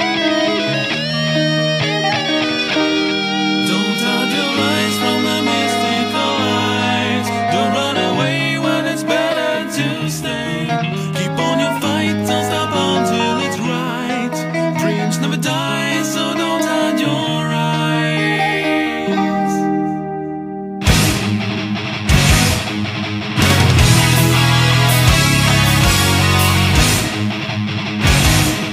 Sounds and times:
Music: 0:00.0 - 0:28.7.

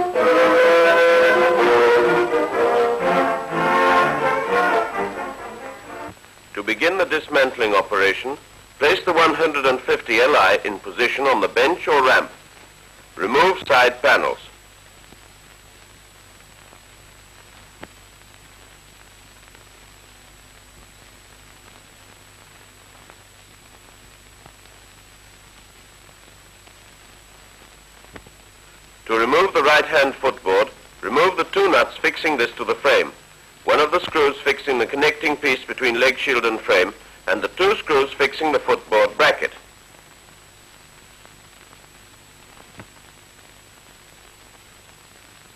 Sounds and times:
Speech: 0:06.6 - 0:12.4, 0:13.2 - 0:14.6, 0:29.1 - 0:39.7.

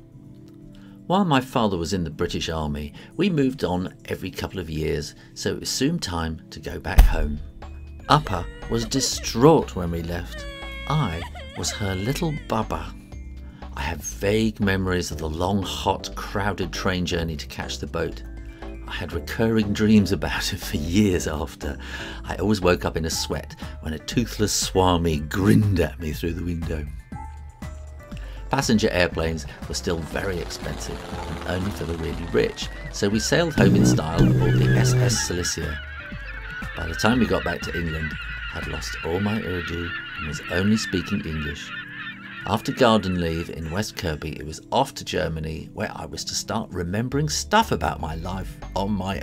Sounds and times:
Music: 0:00.0 - 0:49.2
Speech: 0:01.1 - 0:07.4, 0:08.1 - 0:13.0, 0:13.8 - 0:18.2, 0:18.9 - 0:27.0, 0:28.5 - 0:35.8, 0:36.8 - 0:41.7, 0:42.5 - 0:49.2.

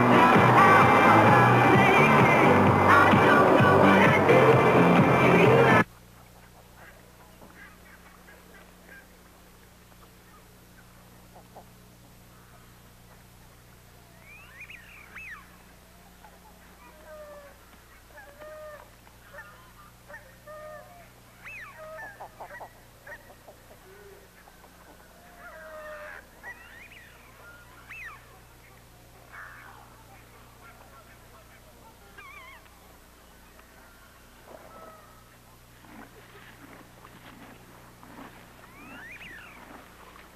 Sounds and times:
Honk: 0:25.3 - 0:28.3, 0:29.3 - 0:29.8.

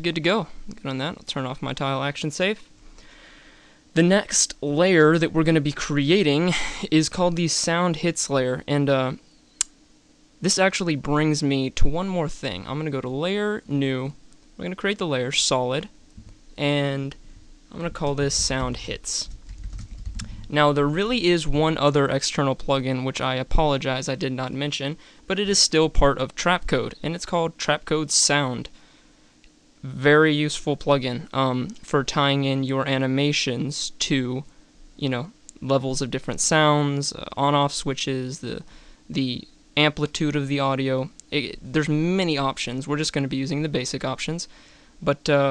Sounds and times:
Speech: 0:00.0 - 0:02.7, 0:04.0 - 0:09.2, 0:10.4 - 0:16.0, 0:16.6 - 0:19.3, 0:20.5 - 0:28.7, 0:29.8 - 0:45.5.

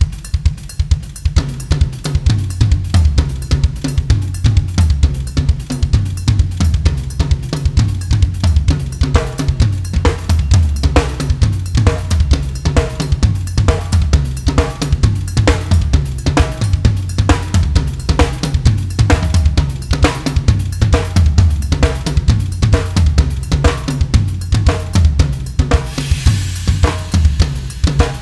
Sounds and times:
Cymbal: 0:00.0 - 0:28.2
Drum kit: 0:00.0 - 0:28.2
Snare drum: 0:00.0 - 0:28.2.

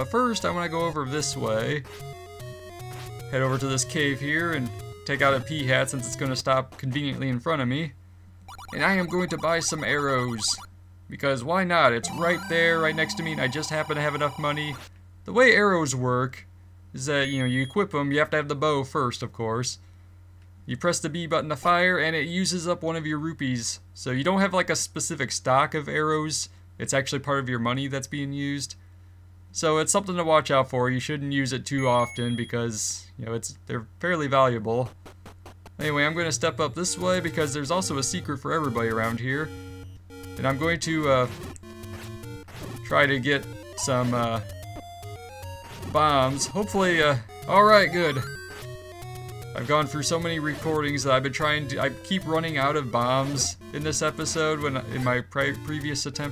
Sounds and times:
Speech: 0:00.0 - 0:01.8, 0:03.3 - 0:08.0, 0:08.7 - 0:19.8, 0:20.7 - 0:28.8, 0:29.6 - 0:34.9, 0:35.8 - 0:39.5, 0:40.4 - 0:41.4, 0:42.8 - 0:44.5, 0:46.0 - 0:48.3, 0:49.6 - 0:56.3.

